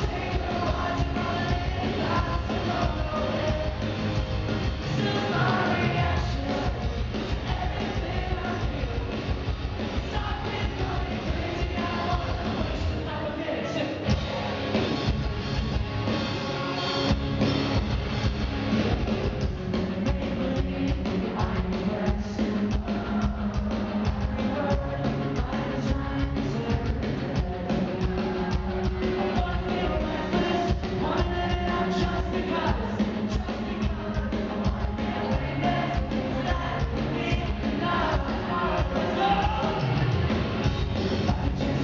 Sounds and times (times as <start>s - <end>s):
Singing: 0.0s - 14.8s, 19.2s - 41.8s
Music: 0.0s - 41.8s.